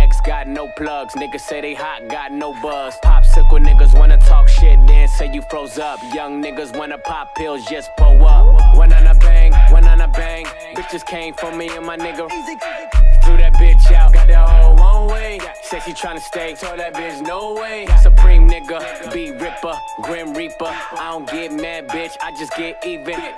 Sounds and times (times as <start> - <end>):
Music: 0.0 - 23.3.